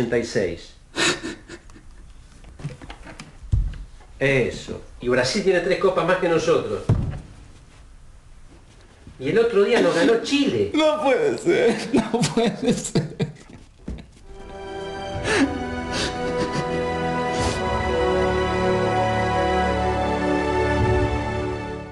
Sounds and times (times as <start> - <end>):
Speech: 4.2 - 6.9, 9.2 - 12.2
Music: 14.3 - 21.9.